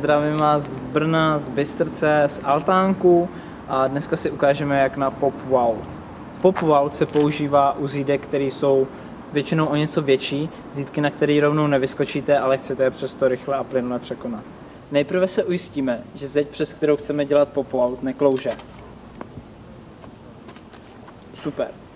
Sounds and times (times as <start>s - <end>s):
Speech: 0.0s - 18.7s, 21.3s - 21.8s.